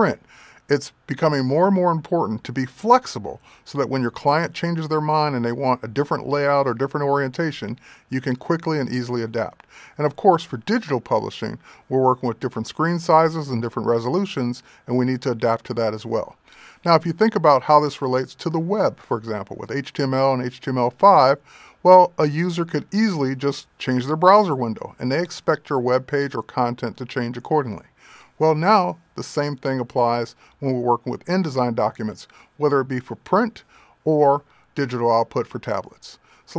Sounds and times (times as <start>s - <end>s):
Speech: 0.0s - 36.5s.